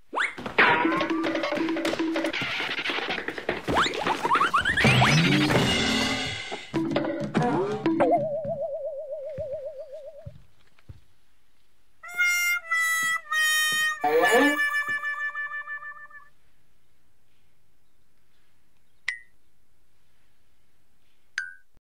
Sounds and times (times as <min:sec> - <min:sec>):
Music: 0:00.7 - 0:02.4, 0:04.9 - 0:08.1, 0:12.0 - 0:16.3.